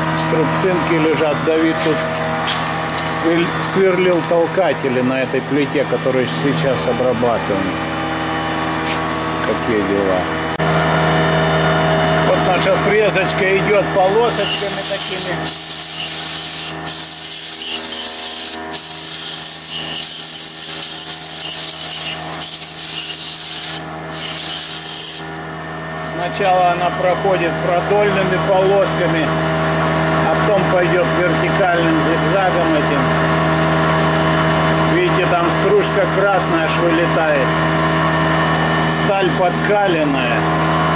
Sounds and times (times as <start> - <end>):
Speech: 0.2 - 2.0, 3.1 - 7.8, 9.4 - 10.3, 12.2 - 15.5, 26.0 - 29.4, 30.2 - 33.1, 34.9 - 37.6, 38.9 - 40.5
Drill: 13.7 - 25.6.